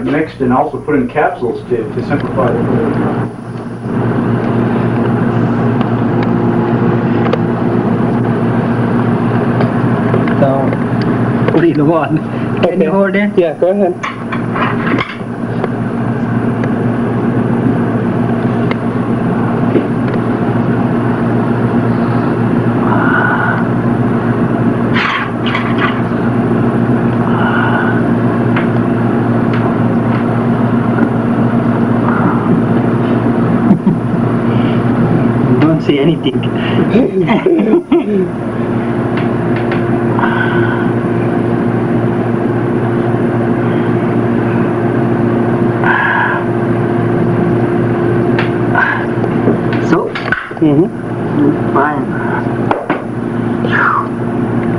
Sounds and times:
Engine: 0:14.0 - 0:37.1, 0:38.1 - 0:54.7.

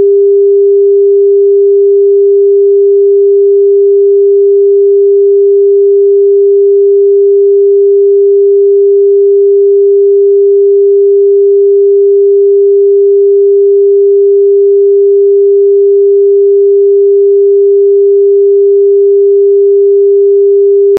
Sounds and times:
Sine wave: 0:00.0 - 0:20.9.

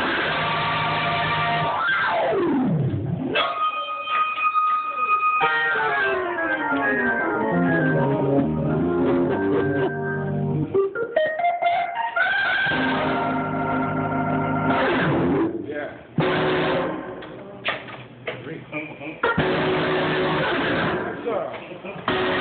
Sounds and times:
Hammond organ: 0:05.0 - 0:15.6, 0:19.2 - 0:22.4.

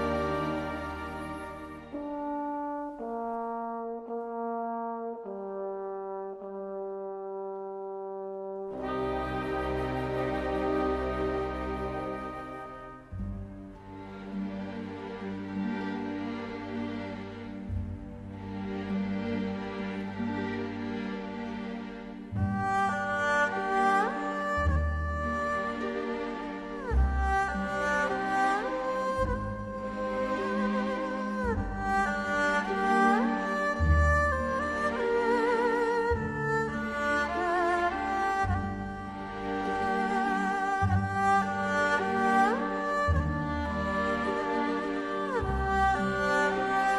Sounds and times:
Tender music: 0:00.0 - 0:05.2, 0:08.7 - 0:46.9.

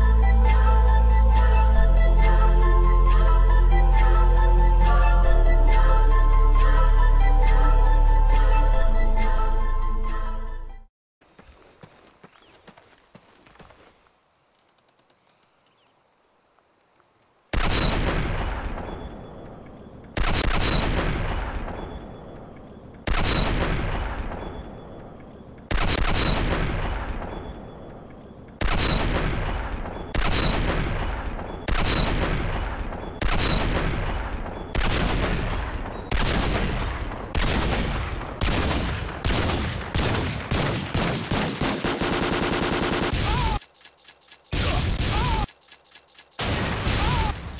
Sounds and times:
Gunshot, gunfire: 0:17.6 - 0:18.9, 0:20.2 - 0:21.8, 0:23.1 - 0:24.5, 0:25.7 - 0:27.4, 0:28.6 - 0:42.3, 0:44.6 - 0:45.5, 0:46.4 - 0:47.4.

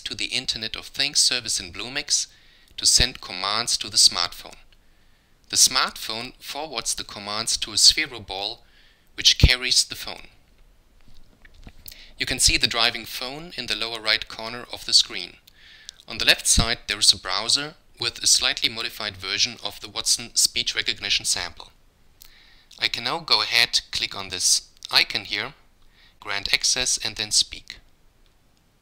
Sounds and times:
Male speech, man speaking: 0:00.0 - 0:04.7, 0:05.5 - 0:08.6, 0:09.2 - 0:10.4, 0:12.2 - 0:15.4, 0:16.1 - 0:21.8, 0:22.8 - 0:25.6, 0:26.2 - 0:27.8.

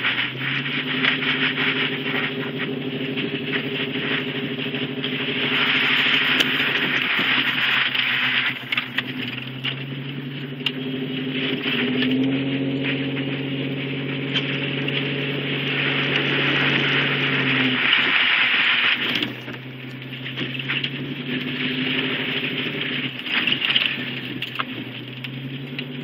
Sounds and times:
Truck: 0:00.0 - 0:26.0.

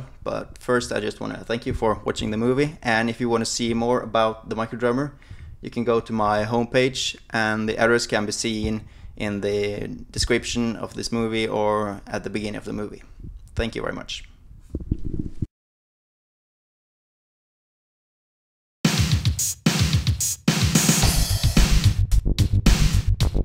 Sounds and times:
Speech: 0:00.0 - 0:14.4.

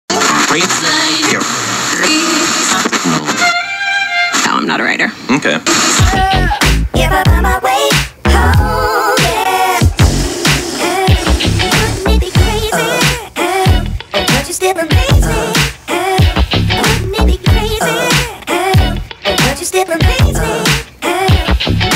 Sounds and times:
Music: 0:00.1 - 0:21.9.

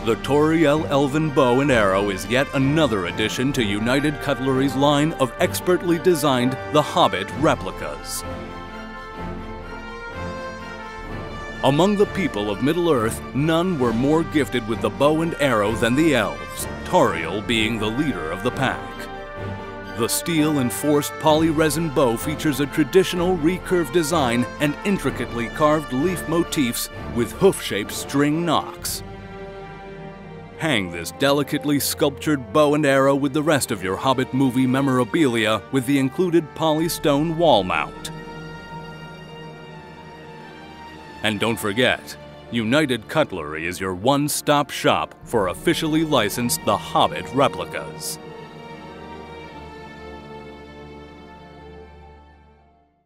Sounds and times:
Speech: 0:00.0 - 0:08.2, 0:11.6 - 0:19.1, 0:20.0 - 0:29.0, 0:30.6 - 0:38.1, 0:41.2 - 0:48.2
Music: 0:00.0 - 0:53.0.

